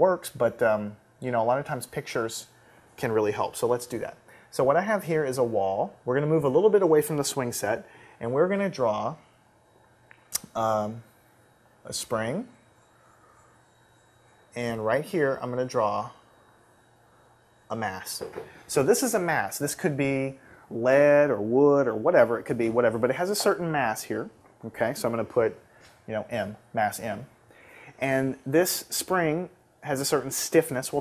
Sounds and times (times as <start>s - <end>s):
Speech: 0.0s - 9.2s, 10.4s - 11.1s, 11.9s - 12.6s, 14.6s - 16.2s, 17.7s - 27.3s, 28.0s - 31.0s.